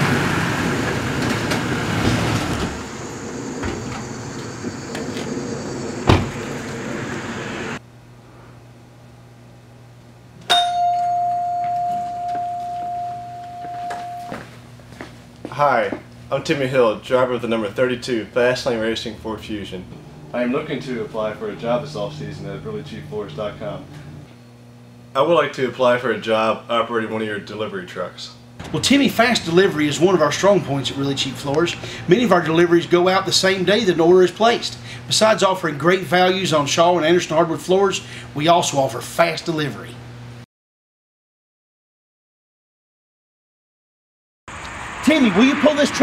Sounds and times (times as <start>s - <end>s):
Speech: 15.5s - 23.9s, 25.2s - 40.0s, 45.0s - 46.0s.